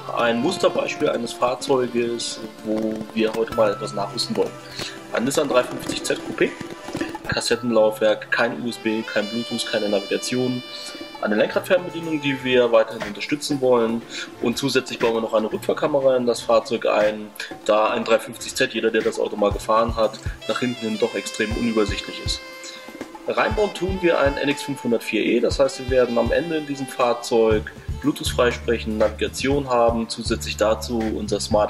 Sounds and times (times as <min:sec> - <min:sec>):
Speech: 0:00.0 - 0:06.7, 0:07.3 - 0:31.7
Music: 0:00.0 - 0:31.7.